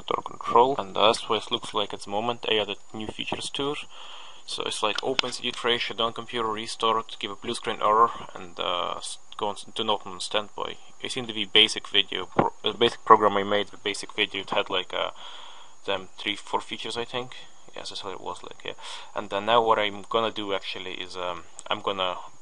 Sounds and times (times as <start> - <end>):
Speech: 0.0 - 3.9, 4.5 - 15.2, 15.8 - 22.4.